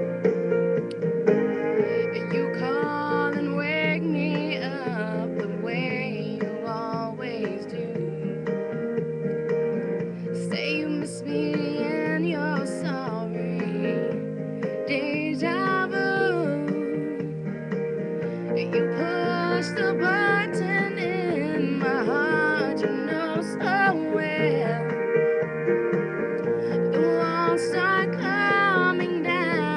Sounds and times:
Music: 0.0s - 29.7s
Female singing: 2.0s - 8.4s, 10.4s - 14.2s, 14.8s - 17.2s, 18.6s - 25.0s, 26.7s - 29.7s.

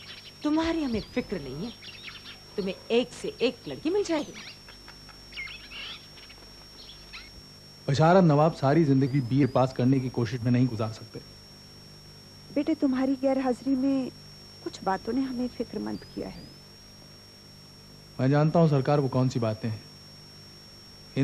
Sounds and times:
Chirp, tweet: 0.0s - 2.7s, 4.2s - 7.3s.

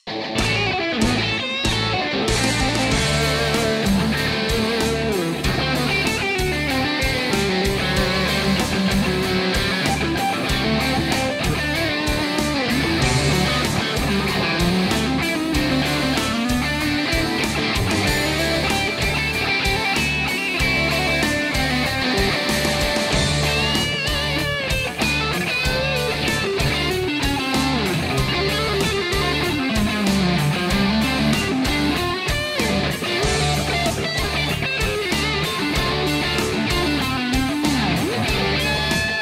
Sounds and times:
Music: 0.0s - 39.2s.

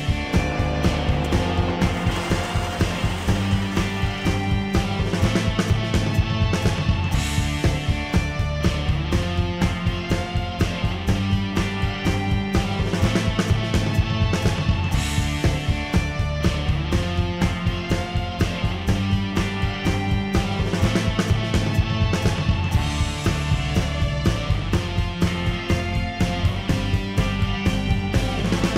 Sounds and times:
Music: 0.0s - 28.7s.

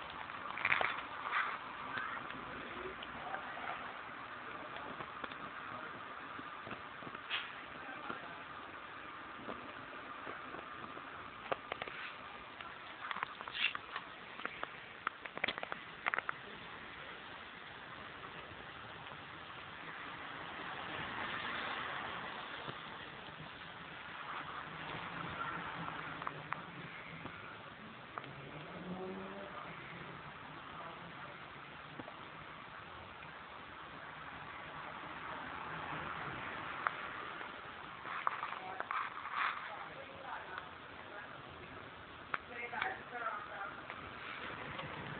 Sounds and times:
Crackle: 0.0s - 45.1s
Vehicle: 0.0s - 45.1s.

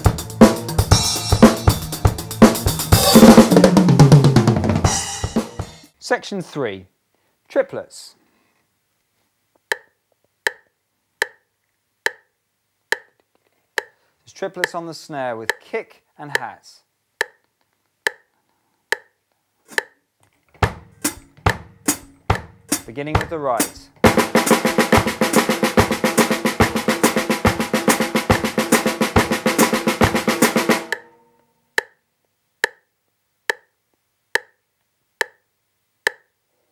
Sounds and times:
Bass drum: 0.0s - 5.9s, 20.6s - 31.0s
Drum kit: 0.0s - 6.0s, 20.6s - 31.2s
Speech: 6.0s - 6.9s, 7.5s - 8.2s, 14.3s - 16.9s, 22.9s - 24.0s.

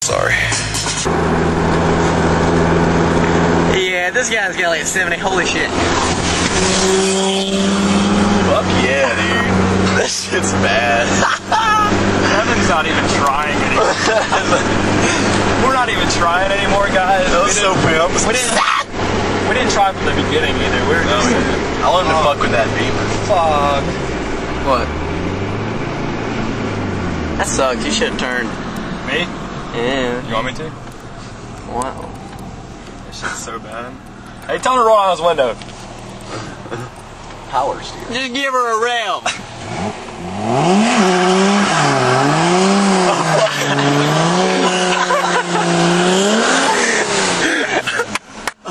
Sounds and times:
Speech: 0.0s - 0.7s, 3.7s - 5.8s, 15.6s - 18.7s, 19.5s - 23.9s, 27.4s - 28.5s, 29.1s - 30.8s, 31.7s - 32.2s, 33.1s - 35.6s, 37.5s - 39.3s.

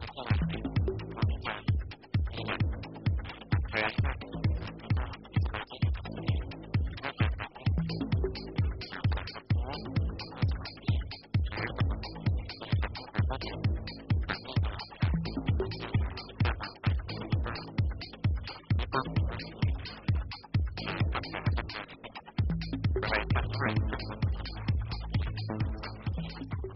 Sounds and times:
Speech: 0.0s - 1.6s, 3.4s - 7.8s, 11.5s - 17.7s, 18.8s - 20.0s, 23.0s - 26.4s
Music: 0.0s - 26.7s.

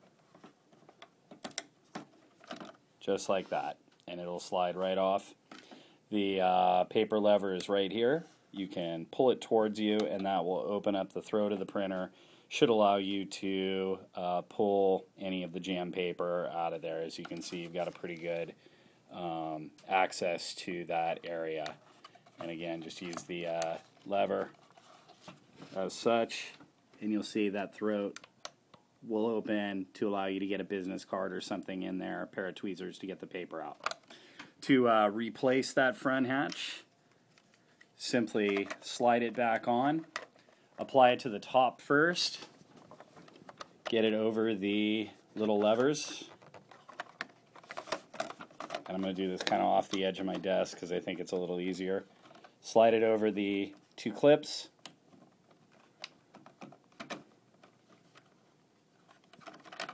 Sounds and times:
Speech: 3.0s - 5.4s, 6.1s - 21.8s, 22.4s - 24.6s, 25.7s - 28.2s, 29.0s - 33.8s, 34.6s - 36.9s, 38.0s - 40.1s, 40.8s - 42.6s, 43.9s - 46.4s, 48.8s - 54.8s.

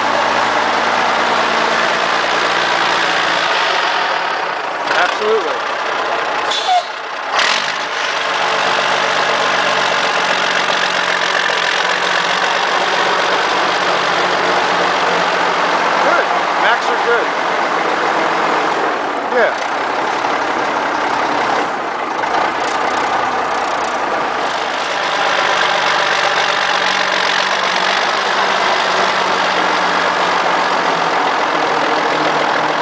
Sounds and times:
Outside, rural or natural: 0.0s - 32.8s
Truck: 0.0s - 32.8s
Speech: 4.9s - 5.6s, 16.0s - 17.3s, 19.3s - 19.6s.

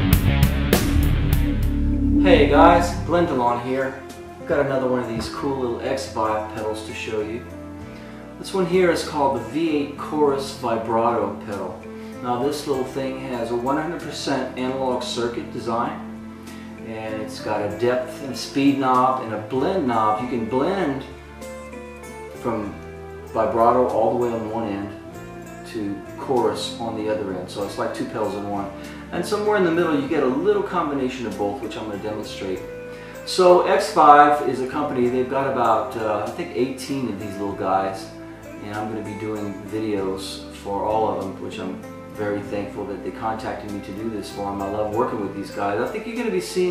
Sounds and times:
Music: 0.0s - 46.7s
Speech: 2.2s - 7.5s, 8.4s - 16.0s, 16.8s - 21.1s, 22.4s - 25.0s, 25.7s - 32.6s, 33.3s - 46.7s.

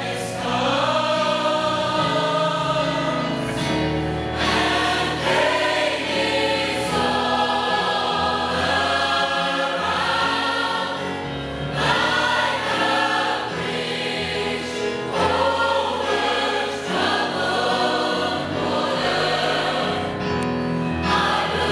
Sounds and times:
Choir: 0.0s - 21.7s.

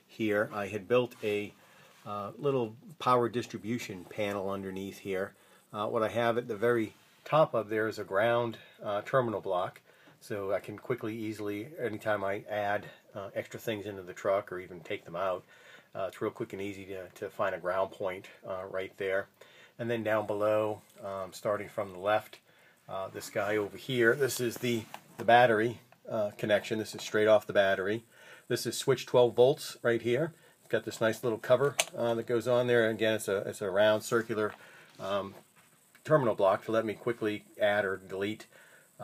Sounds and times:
Speech: 0.0s - 35.4s, 36.0s - 38.5s.

